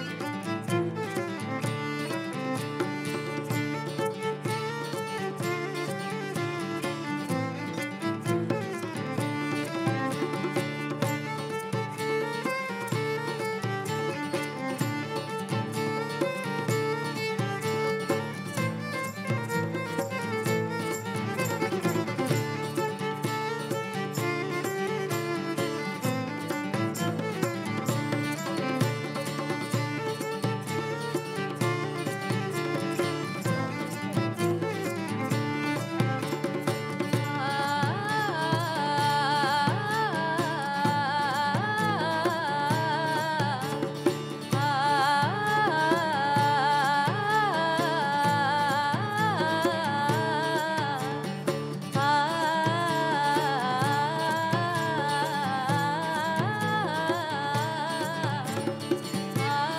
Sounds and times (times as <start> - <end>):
Music: 0.0 - 59.7.